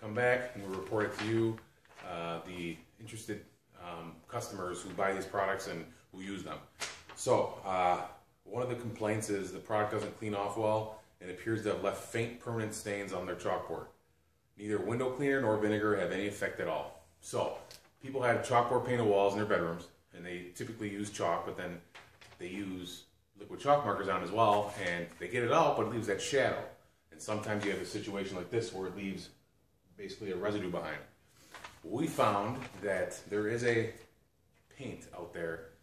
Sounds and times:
Speech: 0.0s - 14.0s, 14.6s - 29.4s, 30.0s - 31.1s, 31.8s - 34.1s, 34.7s - 35.8s.

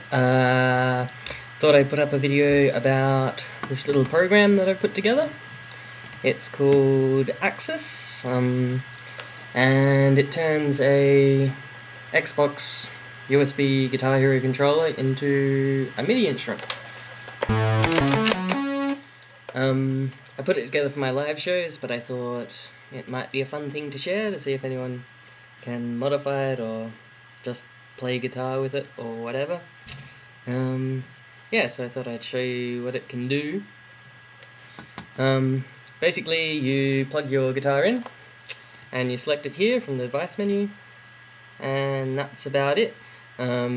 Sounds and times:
Speech: 0.0s - 5.4s, 6.2s - 8.9s, 9.6s - 16.7s, 19.5s - 29.7s, 30.5s - 33.7s, 35.2s - 38.1s, 38.9s - 40.8s, 41.6s - 43.7s.

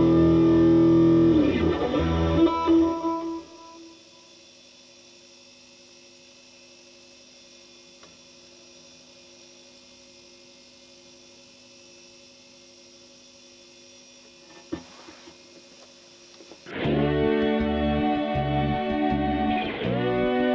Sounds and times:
Guitar: 0.0s - 4.2s, 16.4s - 20.5s.

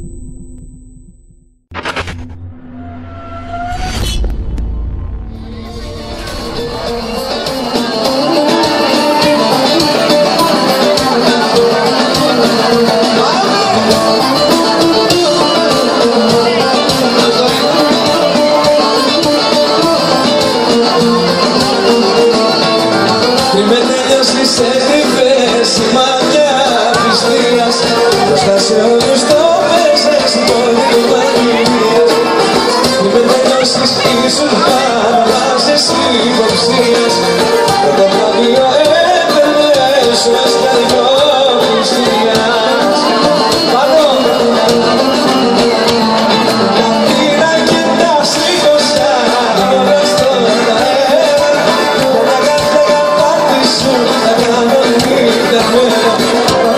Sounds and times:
Speech: 7.7s - 56.7s.

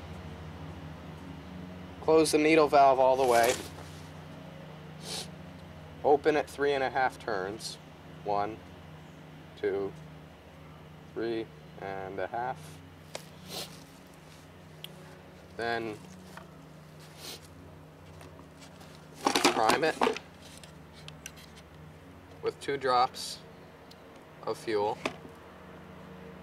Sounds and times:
Speech: 2.0s - 3.7s, 6.0s - 8.6s, 9.6s - 10.0s, 11.2s - 12.7s, 15.6s - 16.0s, 19.4s - 20.2s, 22.4s - 23.4s, 24.4s - 25.1s.

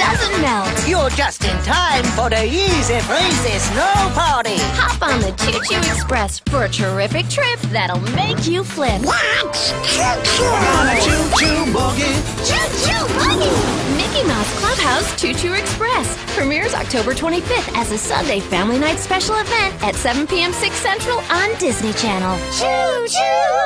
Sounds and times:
Speech: 0.0s - 11.3s, 12.5s - 22.4s
Music: 0.0s - 23.6s.

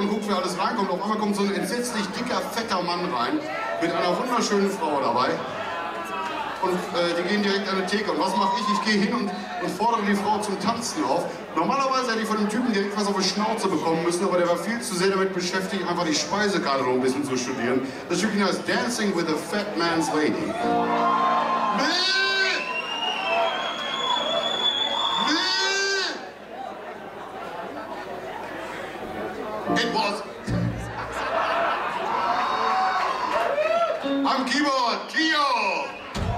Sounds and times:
Speech: 0.0s - 5.5s, 6.6s - 20.6s, 29.3s - 30.3s, 34.2s - 36.0s.

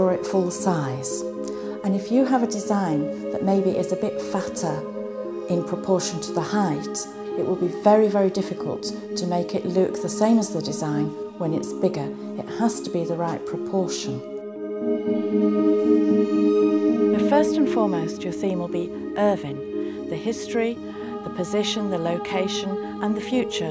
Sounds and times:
Speech: 0.0s - 1.2s, 1.8s - 4.8s, 5.5s - 14.2s, 17.1s - 23.7s
Ambient music: 0.0s - 23.7s.

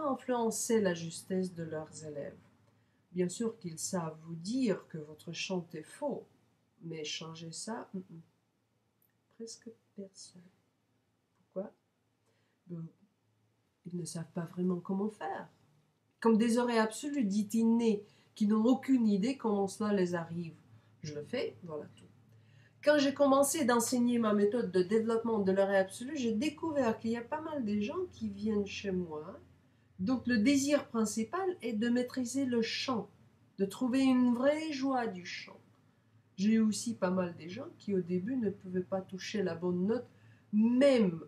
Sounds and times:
Speech: 0.0s - 2.4s, 3.2s - 8.3s, 9.4s - 10.5s, 11.6s - 11.8s, 12.7s - 13.0s, 13.9s - 15.5s, 16.2s - 22.0s, 22.8s - 29.4s, 30.0s - 35.6s, 36.4s - 41.2s.

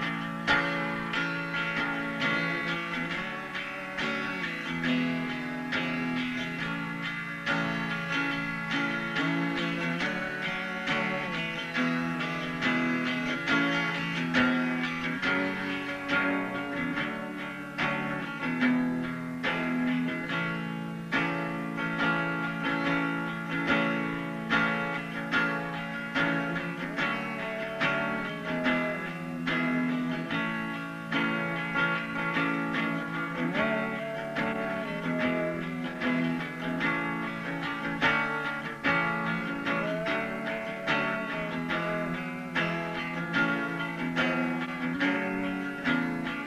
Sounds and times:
Acoustic guitar: 0.0s - 46.4s
Strum: 0.0s - 46.4s.

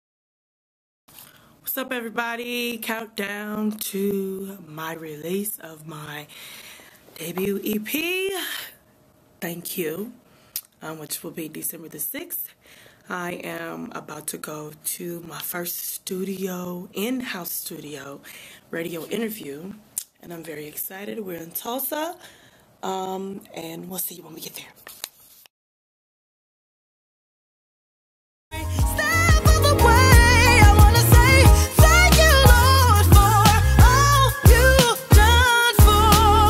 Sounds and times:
Pop music: 28.6s - 36.4s.

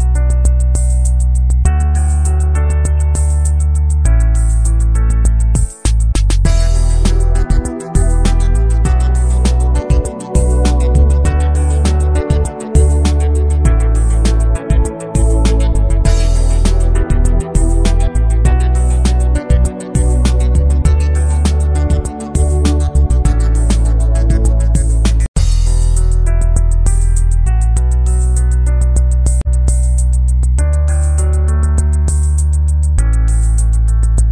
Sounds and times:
Music: 0.0s - 34.3s.

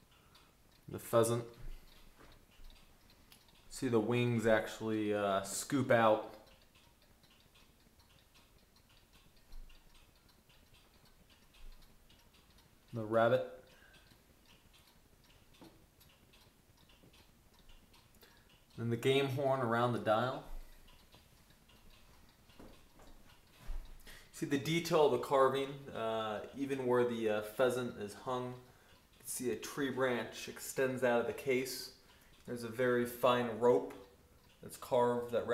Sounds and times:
Speech: 0.9s - 1.6s, 3.7s - 6.4s, 12.9s - 13.6s, 18.8s - 20.5s, 24.4s - 34.0s, 34.6s - 35.5s.

